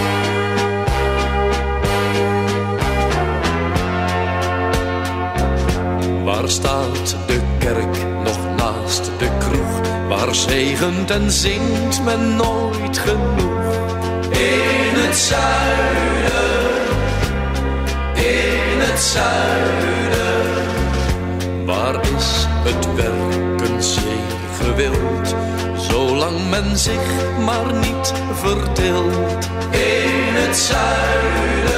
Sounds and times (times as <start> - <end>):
Music: 0.0 - 31.7.